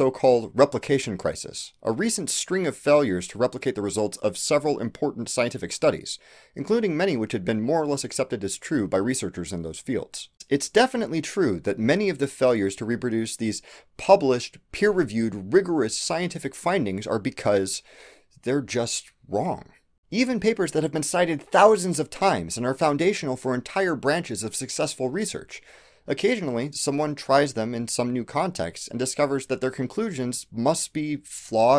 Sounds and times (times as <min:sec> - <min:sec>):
Narration, monologue: 0:00.0 - 0:31.7.